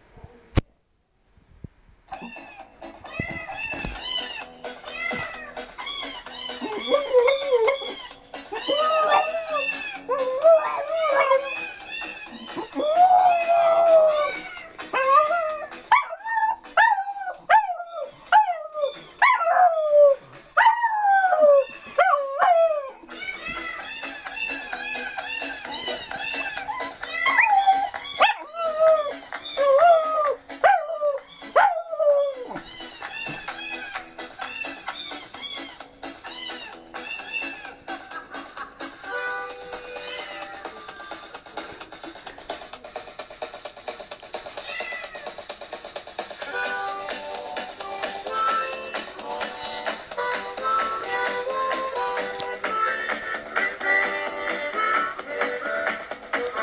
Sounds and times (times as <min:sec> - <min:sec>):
Music: 0:02.1 - 0:56.6.